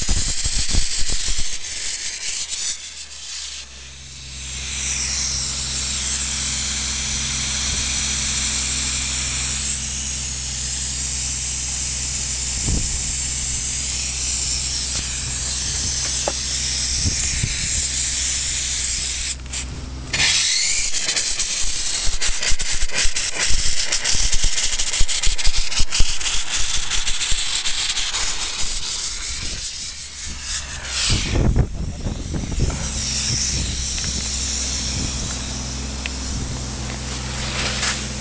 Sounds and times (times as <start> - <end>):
Engine: 0.0 - 38.2.